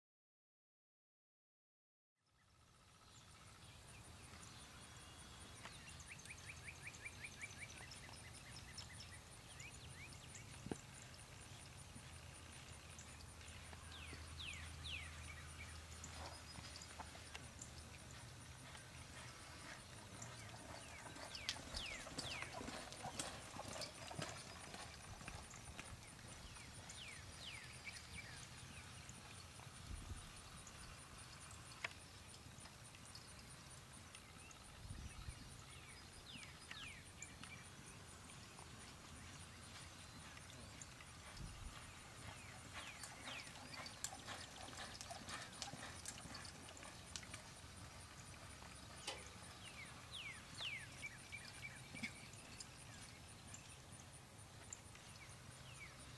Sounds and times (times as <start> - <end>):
Clip-clop: 2.9 - 56.1.